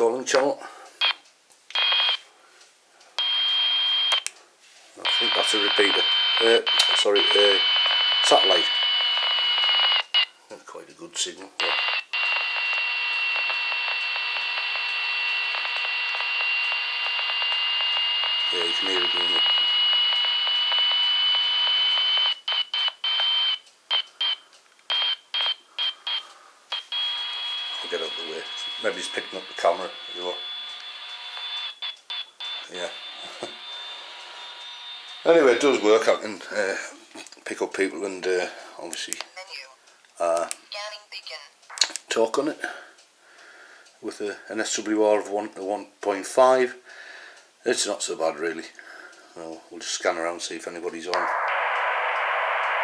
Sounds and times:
Speech: 0.0 - 0.7, 5.0 - 8.8, 10.5 - 11.8, 18.5 - 19.6, 27.8 - 30.4, 32.7 - 33.6, 35.2 - 42.8, 44.0 - 46.8, 47.6 - 48.8, 49.4 - 51.3.

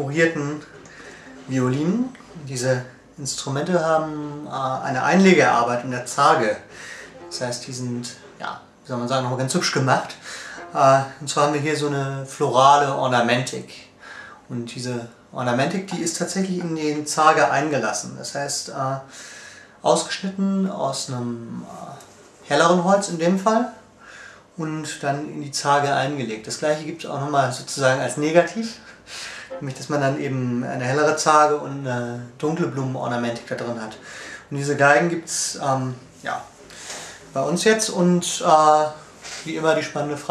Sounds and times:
Speech: 0.0 - 19.1, 19.8 - 23.9, 24.6 - 28.9, 29.5 - 36.6, 37.3 - 40.3.

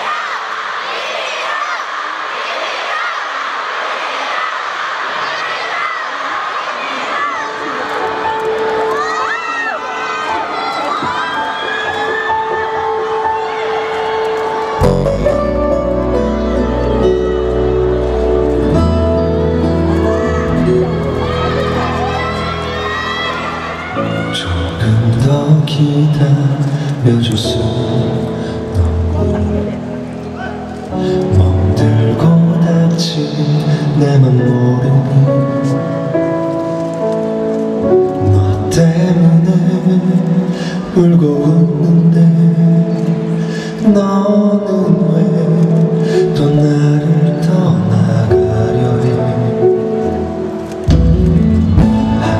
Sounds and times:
Music: 7.4 - 52.4
Speech: 14.8 - 15.5.

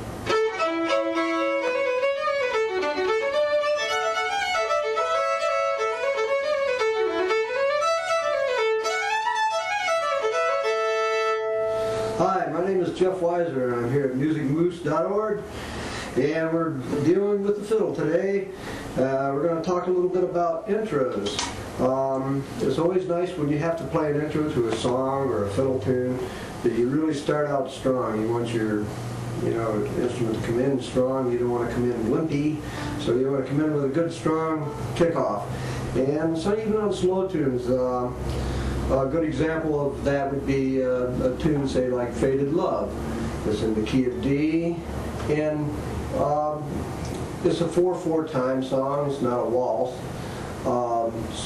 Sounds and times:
Speech: 12.2 - 15.5, 16.2 - 38.2, 38.9 - 42.9, 43.5 - 46.8, 47.4 - 50.0, 50.6 - 51.4.

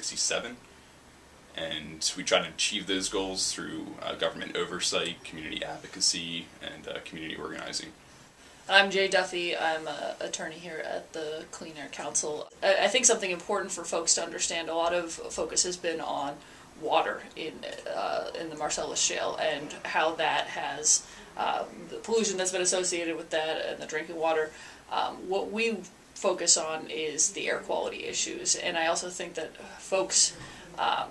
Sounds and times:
Speech: 8.7 - 31.1.

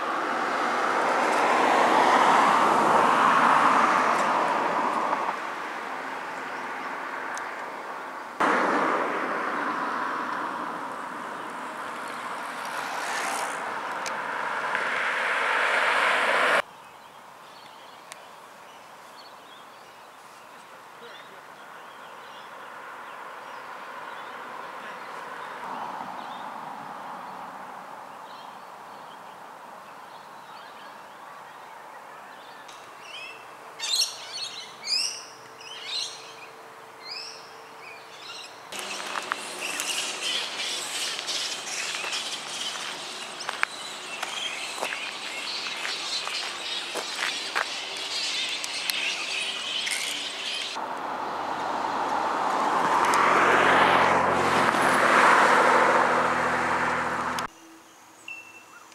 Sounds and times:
Bird: 30.2 - 50.8.

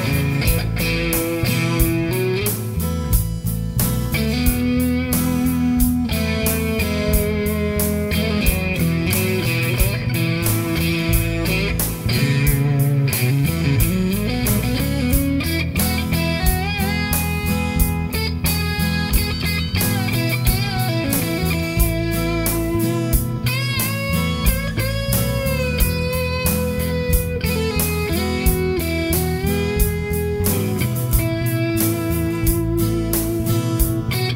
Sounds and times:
Rock music: 0.0 - 34.3.

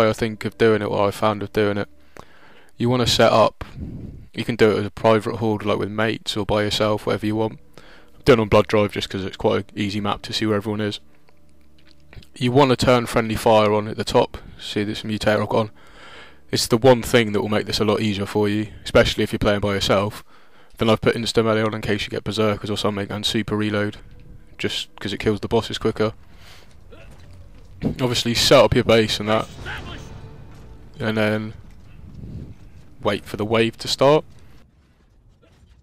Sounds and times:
Speech: 0.0 - 1.9, 2.8 - 3.6, 4.4 - 7.6, 8.2 - 11.0, 12.2 - 15.7, 16.5 - 20.2, 20.8 - 24.0, 24.6 - 26.2, 27.8 - 30.2, 31.0 - 31.6, 33.0 - 34.3.

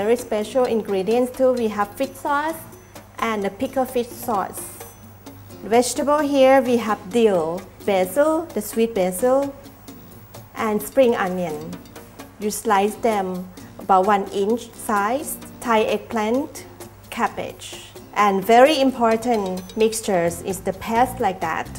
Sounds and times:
Speech: 0.0 - 4.8, 5.6 - 9.6, 10.6 - 11.7, 12.4 - 21.7
Music: 0.0 - 21.7.

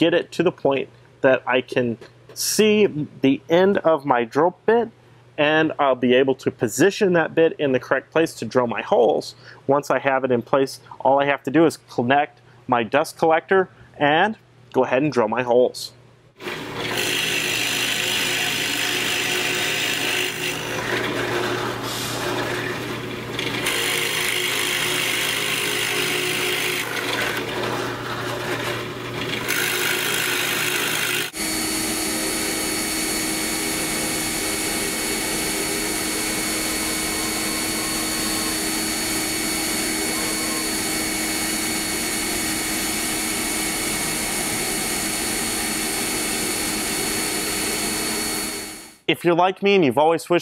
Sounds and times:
Drill: 16.4 - 49.0.

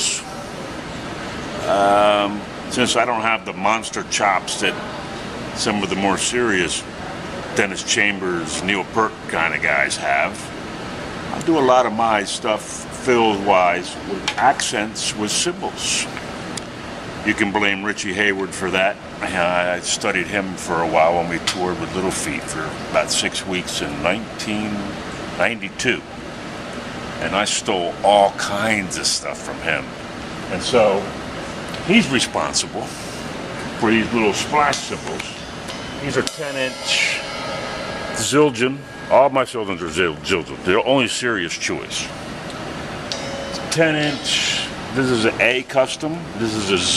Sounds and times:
Speech: 0.0 - 0.8, 1.5 - 10.5, 11.4 - 16.2, 17.2 - 26.1, 27.2 - 31.2, 31.8 - 35.4, 36.0 - 37.3, 38.2 - 42.2, 43.6 - 46.9.

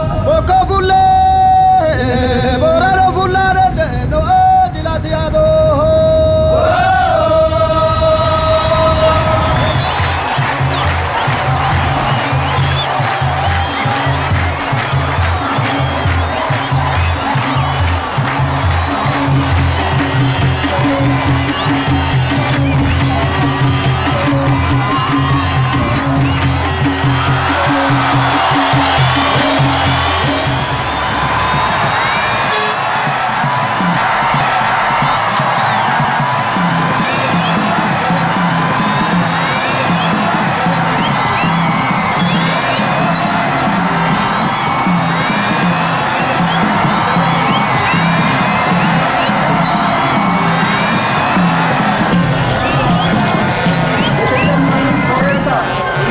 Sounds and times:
Dance music: 7.3 - 56.1.

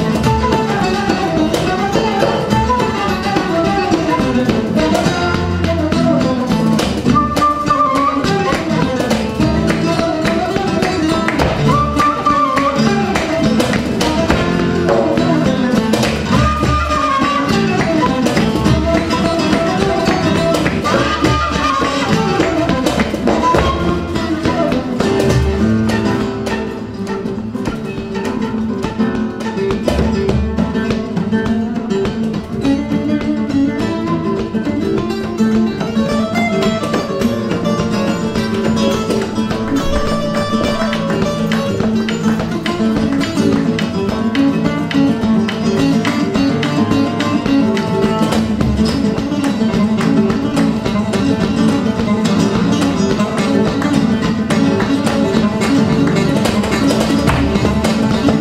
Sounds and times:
Flamenco: 0.0 - 58.4
Guitar: 0.0 - 58.4.

